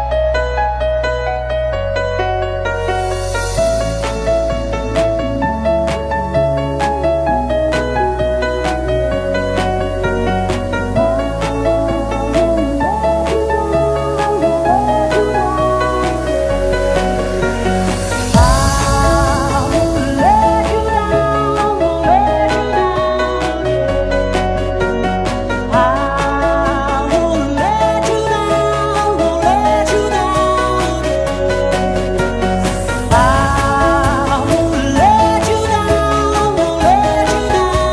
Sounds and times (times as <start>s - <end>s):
Music: 0.0s - 37.9s.